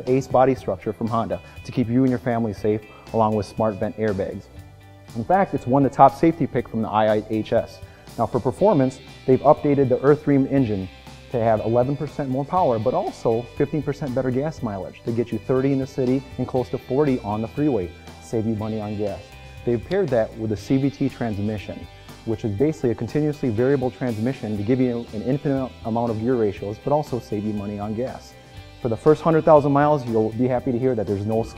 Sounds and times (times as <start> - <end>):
Speech: 0.0 - 4.5, 5.2 - 31.5
Music: 0.0 - 31.5.